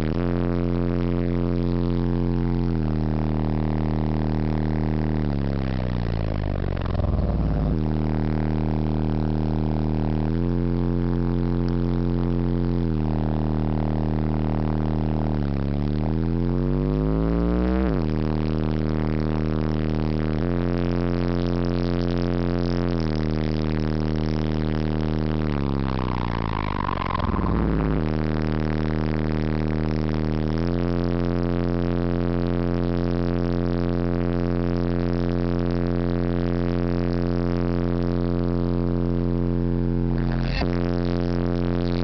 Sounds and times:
Vehicle: 2.6 - 20.8.

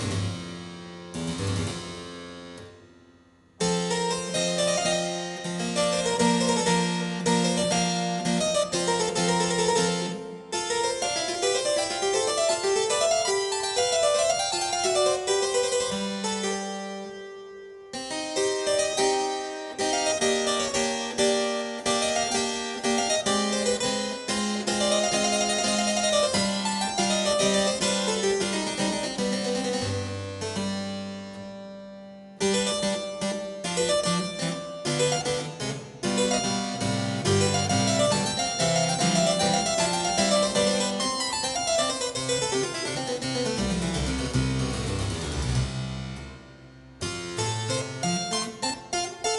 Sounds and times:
Music: 0.0 - 49.3.

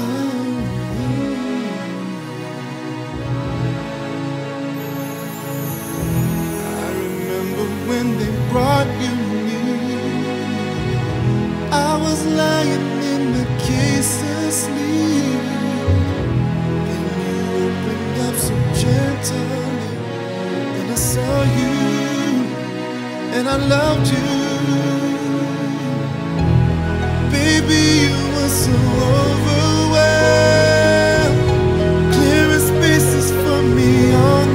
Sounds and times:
Violin, fiddle: 0.0 - 34.5.

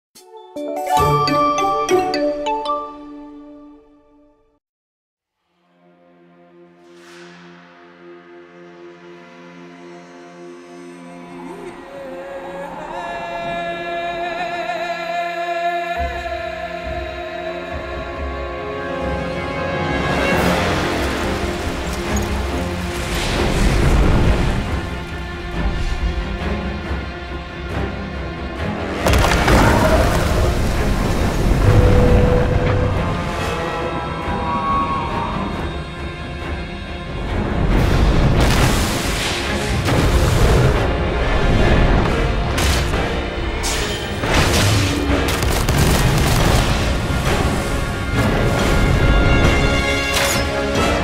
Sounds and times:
Jingle, tinkle: 0.2 - 3.2.

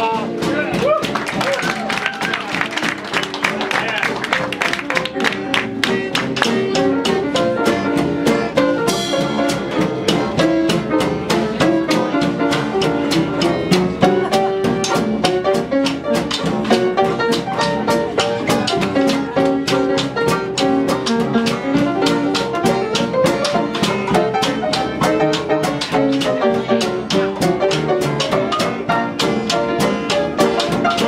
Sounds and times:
Blues: 0.0 - 31.0
Jazz: 0.0 - 31.0
Musical instrument: 0.0 - 31.0.

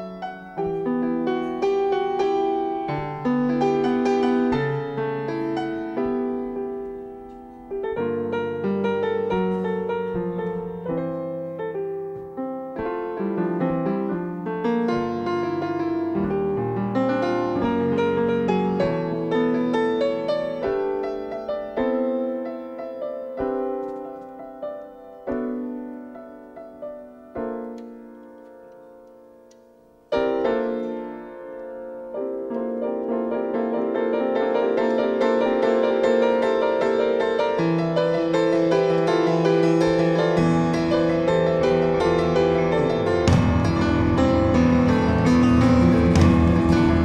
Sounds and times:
Harpsichord: 30.2 - 47.0.

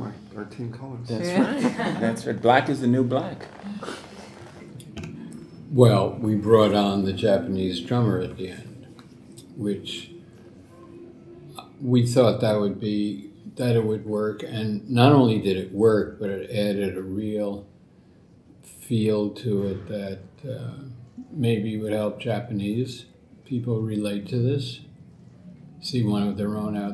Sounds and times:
Speech: 5.7 - 8.7, 9.4 - 10.1, 11.5 - 17.7, 18.7 - 24.9, 25.8 - 26.9.

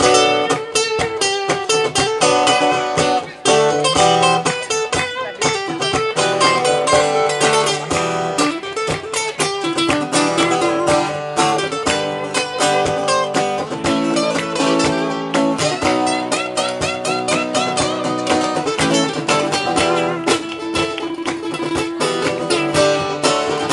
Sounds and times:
Mandolin: 0.0 - 23.7.

